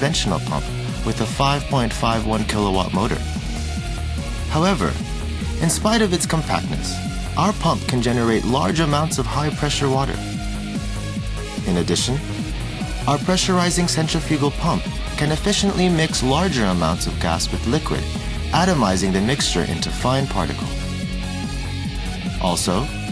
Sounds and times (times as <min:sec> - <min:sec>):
Speech: 0:00.0 - 0:03.2, 0:04.5 - 0:05.0, 0:05.6 - 0:10.2, 0:11.6 - 0:12.2, 0:13.1 - 0:18.0, 0:18.6 - 0:20.8, 0:22.4 - 0:22.9
Music: 0:00.0 - 0:23.1.